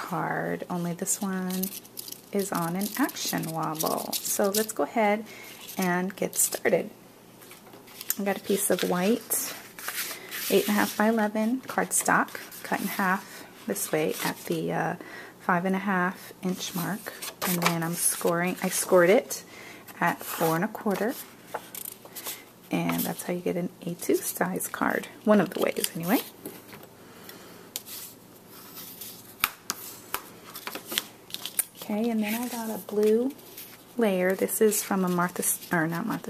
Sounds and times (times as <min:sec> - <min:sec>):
Speech: 0:00.0 - 0:01.7, 0:02.4 - 0:05.2, 0:05.8 - 0:06.9, 0:08.2 - 0:09.6, 0:10.5 - 0:19.4, 0:20.0 - 0:21.2, 0:22.7 - 0:26.3, 0:31.8 - 0:33.4, 0:34.0 - 0:36.3.